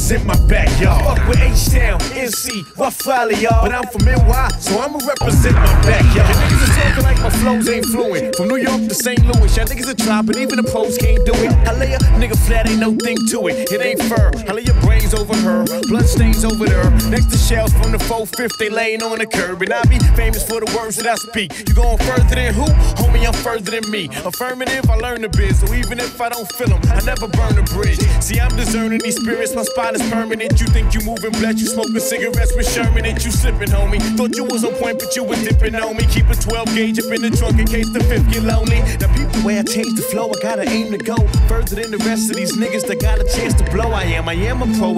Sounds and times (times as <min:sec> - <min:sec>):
Rhythm and blues: 0:00.1 - 0:18.5, 0:19.1 - 0:43.9
Blues: 0:05.2 - 0:12.9.